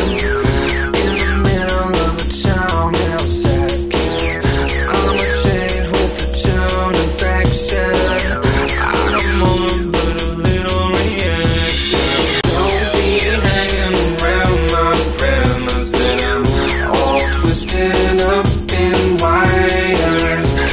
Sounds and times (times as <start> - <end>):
Funk: 0.0 - 20.7.